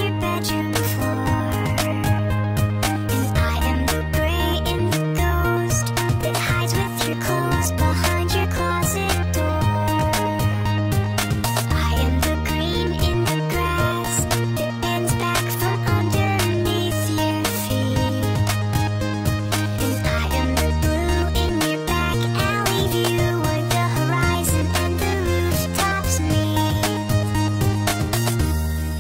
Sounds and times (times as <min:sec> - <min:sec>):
Music: 0:00.0 - 0:29.0.